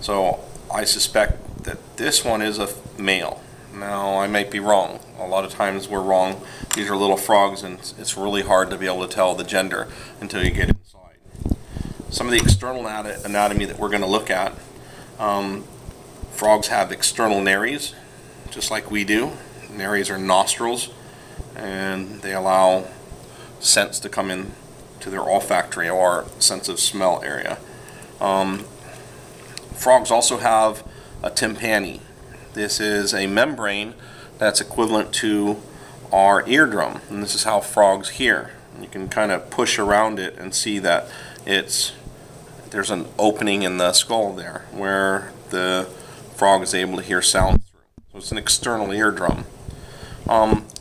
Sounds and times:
Speech: 0.0 - 11.2, 12.1 - 14.6, 15.2 - 15.7, 16.3 - 21.0, 21.6 - 23.0, 23.6 - 27.6, 28.2 - 28.7, 29.8 - 42.0, 42.7 - 49.5, 50.3 - 50.8.

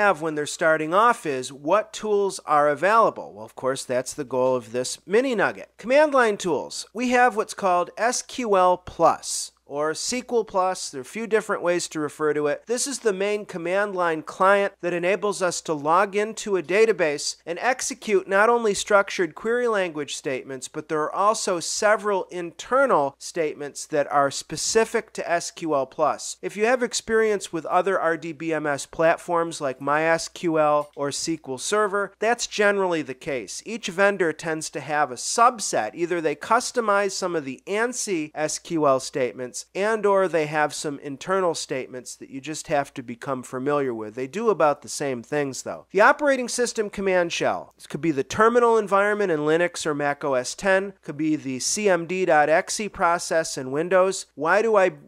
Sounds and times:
Speech: 0.0 - 55.0.

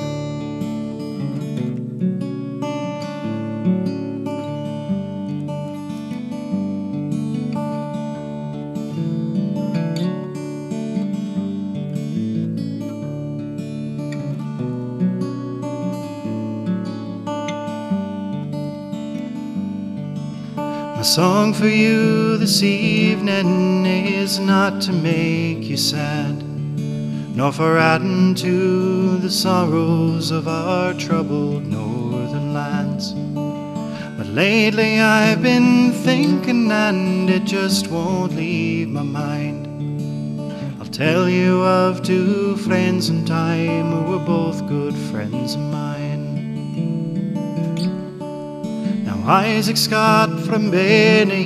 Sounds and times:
Acoustic guitar: 0.0 - 51.4.

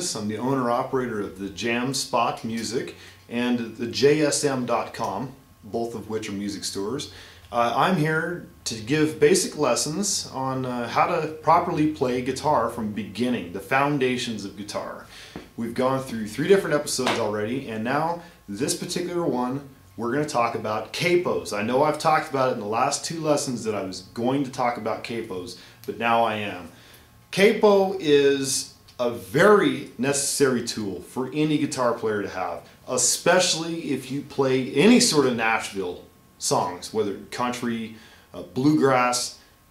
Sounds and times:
Speech: 0.0 - 39.4.

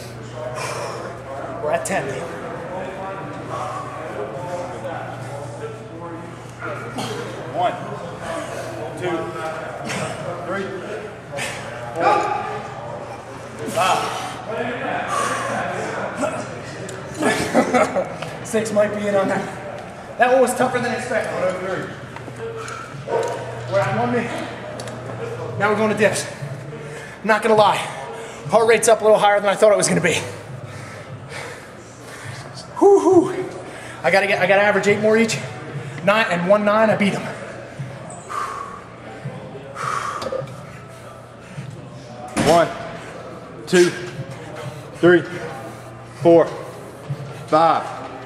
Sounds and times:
Inside, large room or hall: 0.0 - 48.2.

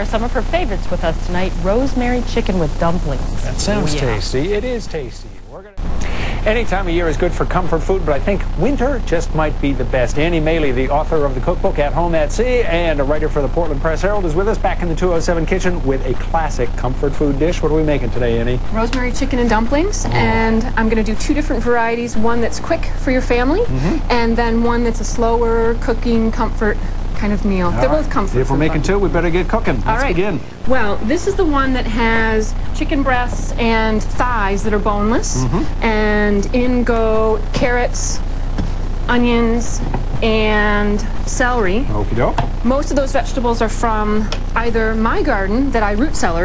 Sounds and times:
Speech: 0.0 - 5.8, 6.4 - 38.2, 39.1 - 46.4.

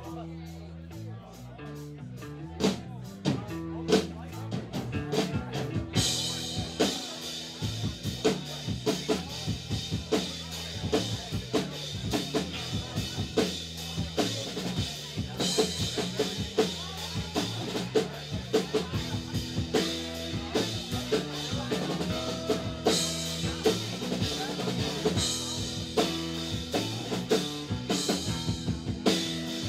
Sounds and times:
Music: 0.0 - 29.6
Speech: 0.0 - 29.6.

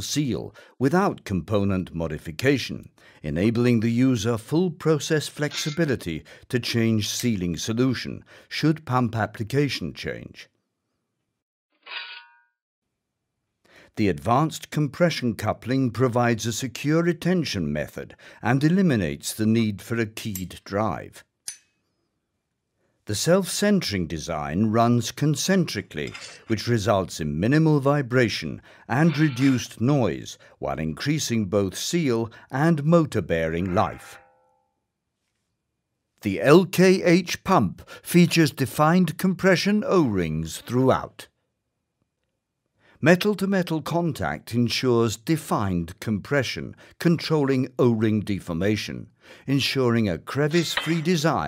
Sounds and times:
Speech: 0.0 - 10.5, 13.9 - 21.2, 23.1 - 34.2, 36.2 - 41.3, 43.0 - 51.4.

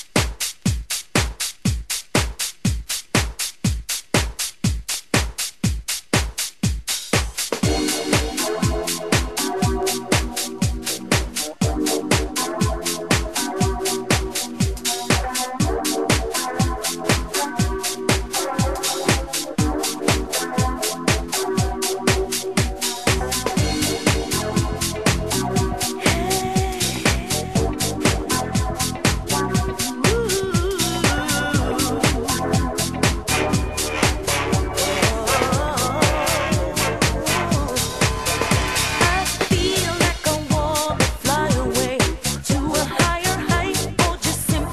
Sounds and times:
Music: 0.0 - 44.7.

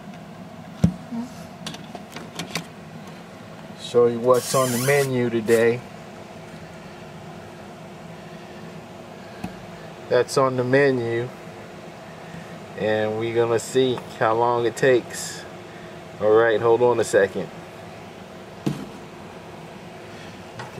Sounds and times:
Speech: 3.8 - 5.9, 10.1 - 11.4, 12.8 - 15.5, 16.2 - 17.5.

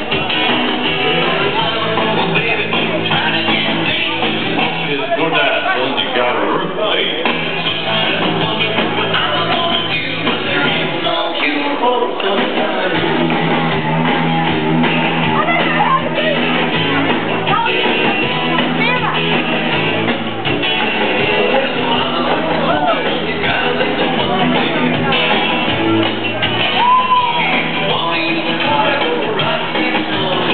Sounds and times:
Rock and roll: 0.0 - 30.5.

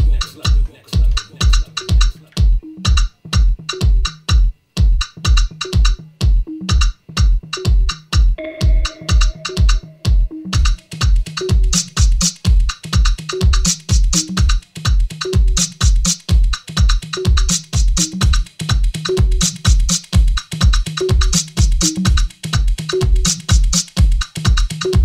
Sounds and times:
House music: 0.0 - 25.0
Inside, small room: 0.0 - 25.0.

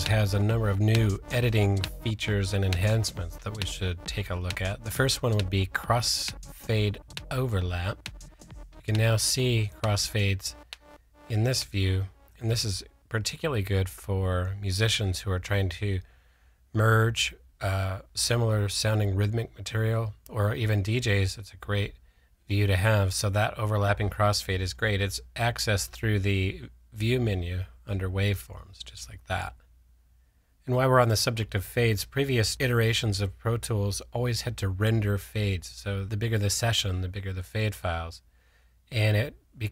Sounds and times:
Speech: 0.0 - 8.0, 8.8 - 10.6, 11.3 - 16.1, 16.7 - 29.6, 30.6 - 38.2, 38.9 - 39.7
Music: 0.0 - 13.1.

